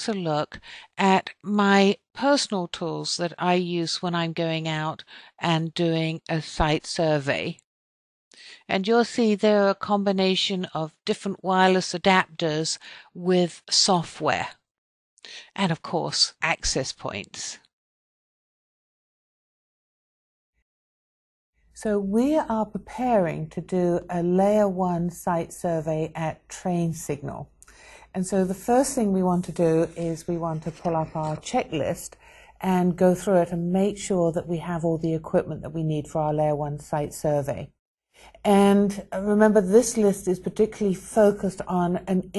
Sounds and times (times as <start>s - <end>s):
Speech: 0.0s - 7.6s, 8.4s - 14.6s, 15.3s - 17.7s, 21.8s - 27.5s, 28.1s - 37.7s, 38.4s - 42.3s.